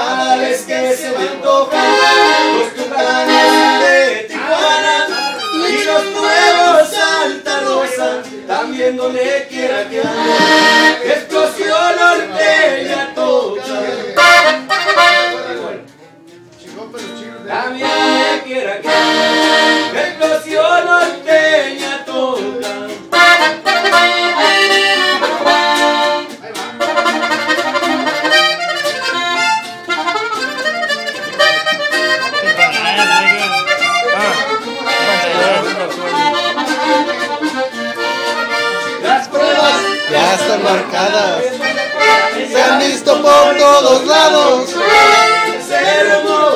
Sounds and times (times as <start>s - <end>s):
Music: 0.0s - 46.5s.